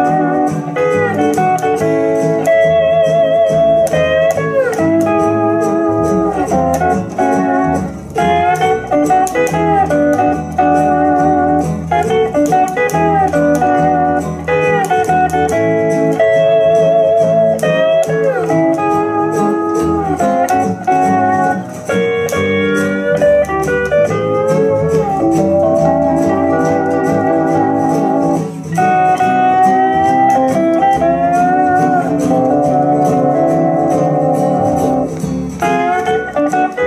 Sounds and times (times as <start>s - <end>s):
Guitar: 0.0s - 36.8s.